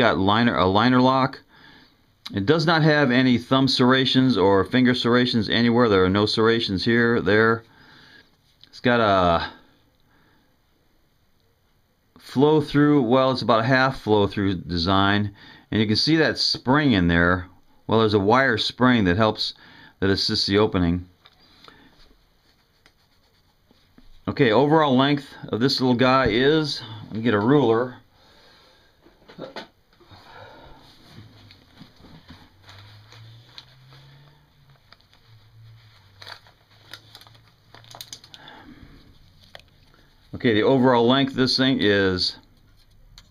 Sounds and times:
Speech: 0.0 - 1.5, 2.3 - 7.7, 8.7 - 9.6, 12.2 - 21.1, 24.2 - 28.1, 40.3 - 42.5.

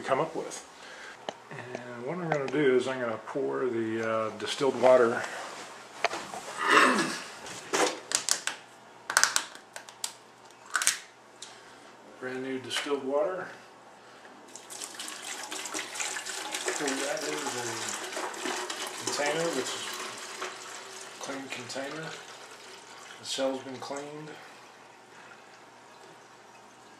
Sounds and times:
Water: 14.5 - 26.9.

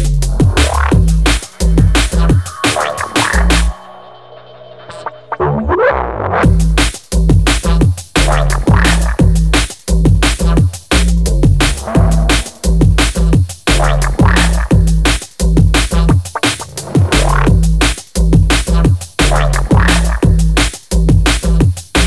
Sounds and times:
Drum and bass: 0.0 - 22.0.

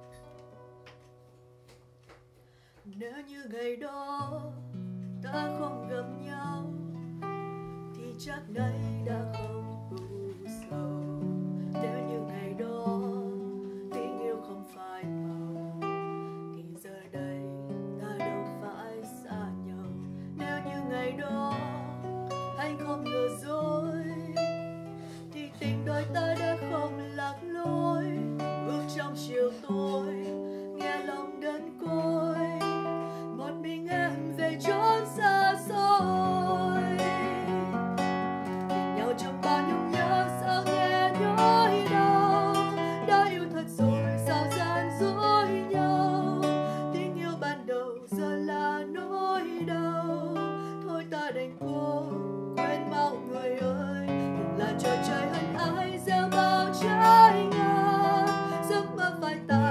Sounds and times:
Acoustic guitar: 0.0 - 59.7.

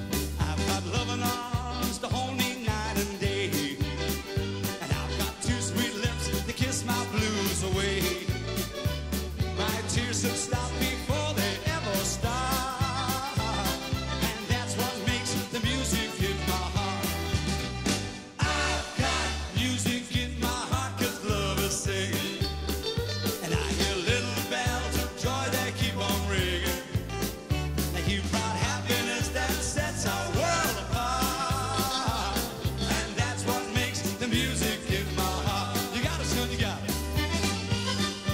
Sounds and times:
Folk music: 0.0 - 38.3.

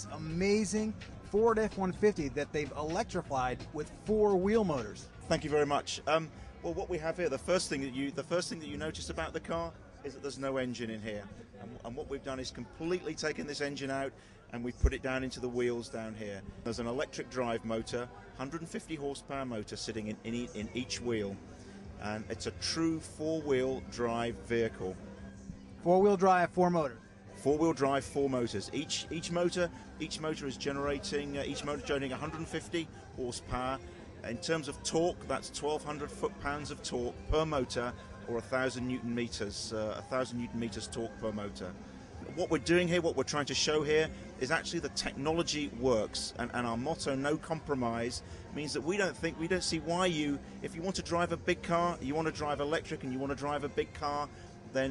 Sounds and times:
Speech: 0.0 - 54.9.

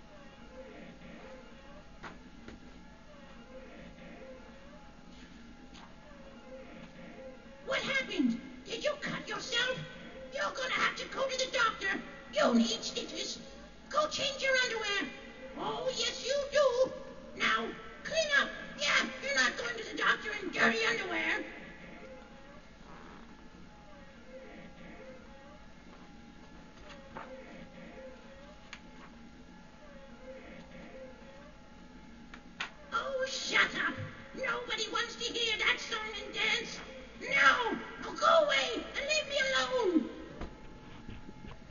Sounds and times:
Speech: 7.7 - 21.6, 33.0 - 40.3.

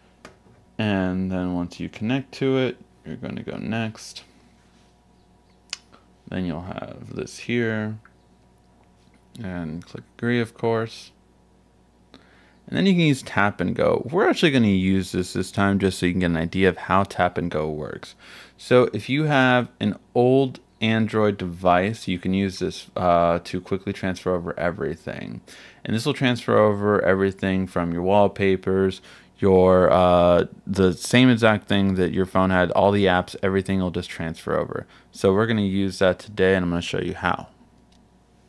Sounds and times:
Inside, small room: 0.0 - 38.4
Speech: 0.8 - 4.3, 6.3 - 8.1, 9.4 - 11.2, 12.7 - 37.6.

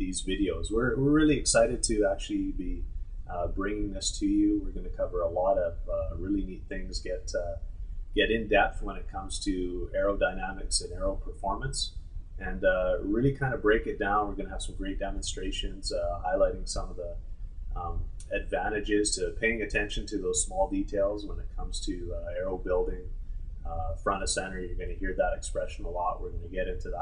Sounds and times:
Speech: 0.0 - 7.6, 8.2 - 17.2, 17.8 - 23.1, 23.7 - 27.0.

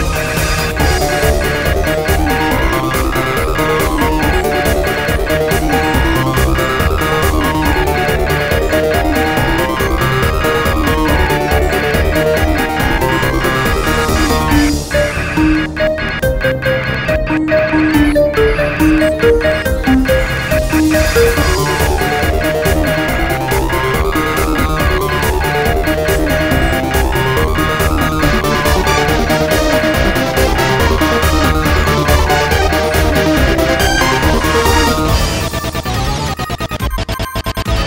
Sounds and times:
Video game music: 0.0 - 37.8.

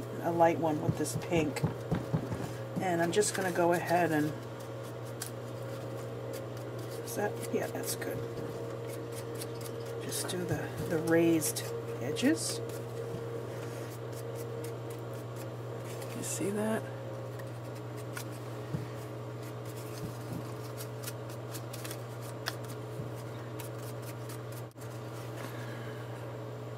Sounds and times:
Speech: 0.2 - 1.6, 2.8 - 4.4, 7.1 - 8.3, 10.0 - 12.6, 16.2 - 16.9.

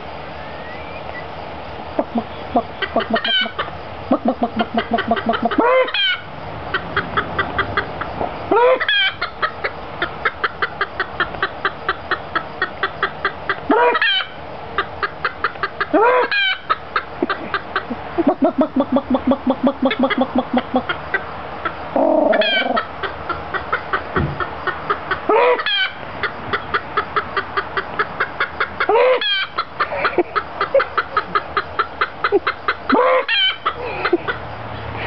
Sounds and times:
Chicken, rooster: 2.0 - 35.0.

